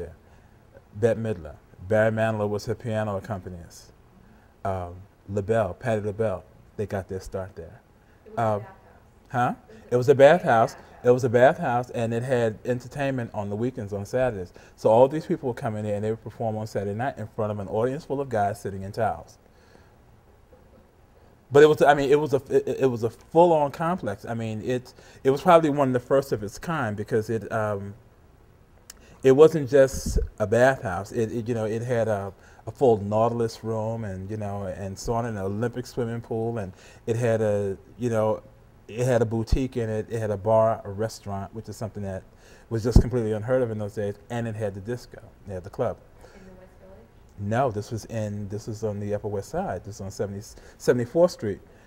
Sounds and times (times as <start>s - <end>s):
Speech: 1.0s - 3.9s, 4.7s - 19.4s, 21.5s - 28.0s, 29.2s - 51.6s.